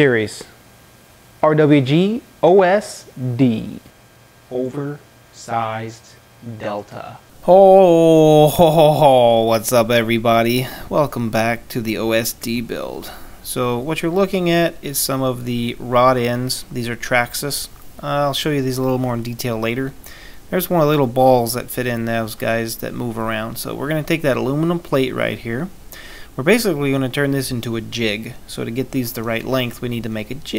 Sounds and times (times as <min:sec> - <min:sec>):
Speech: 0:00.0 - 0:00.6, 0:01.4 - 0:03.9, 0:04.5 - 0:25.7, 0:26.4 - 0:30.5.